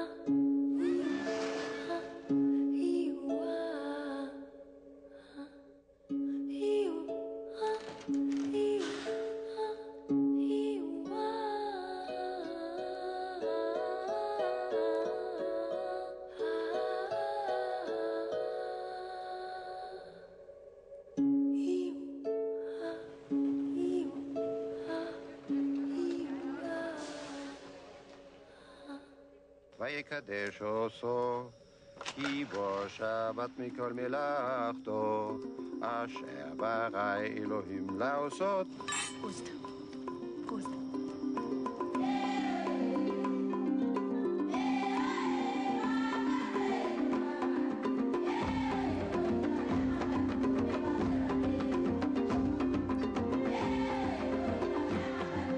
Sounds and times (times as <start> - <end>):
Lullaby: 0.0 - 55.5.